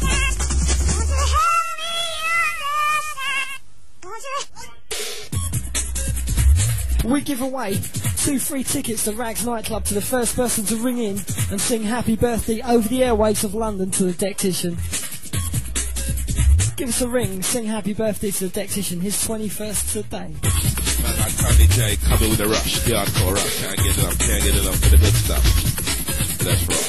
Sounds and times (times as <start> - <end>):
Music: 0.0 - 26.8
Speech: 7.0 - 14.8, 16.8 - 20.4, 21.0 - 25.5.